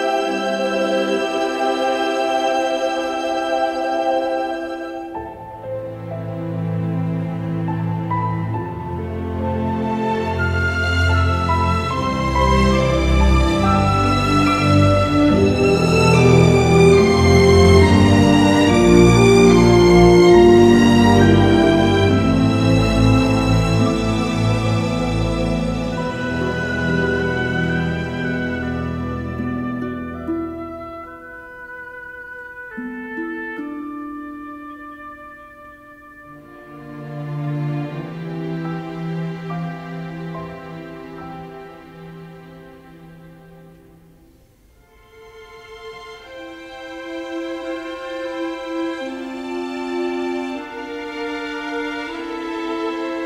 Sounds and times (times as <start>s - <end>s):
Music: 0.0s - 53.2s.